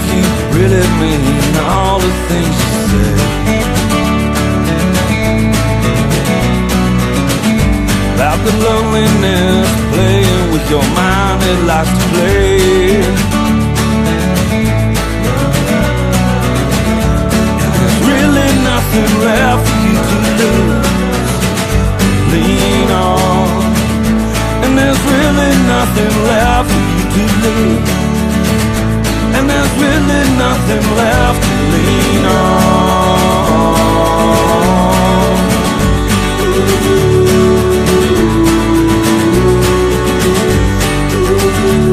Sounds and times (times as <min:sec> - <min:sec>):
Music: 0:00.0 - 0:41.9.